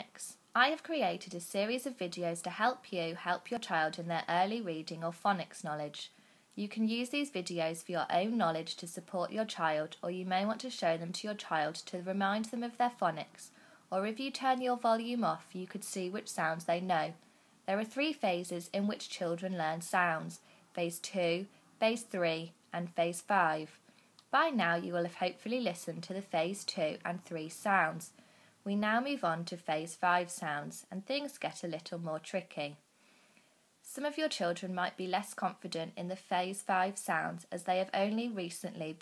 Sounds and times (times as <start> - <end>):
Speech: 0.0 - 32.8, 33.8 - 39.0.